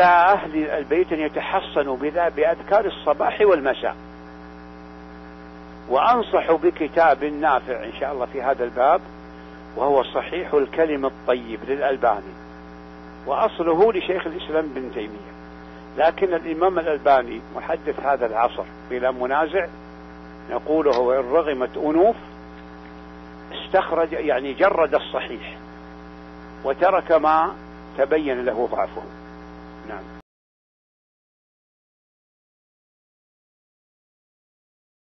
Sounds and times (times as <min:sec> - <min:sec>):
Speech: 0:00.0 - 0:04.0, 0:05.9 - 0:09.1, 0:09.8 - 0:12.4, 0:13.3 - 0:15.4, 0:16.0 - 0:19.7, 0:20.5 - 0:22.3, 0:23.5 - 0:25.6, 0:26.6 - 0:29.2, 0:29.8 - 0:30.1.